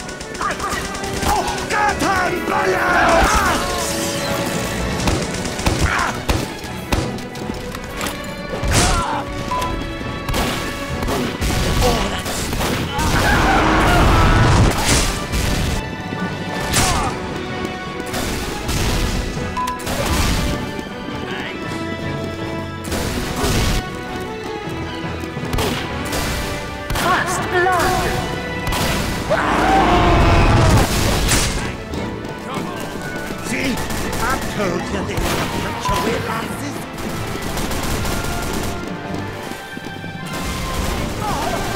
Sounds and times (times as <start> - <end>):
Music: 0.0 - 41.7.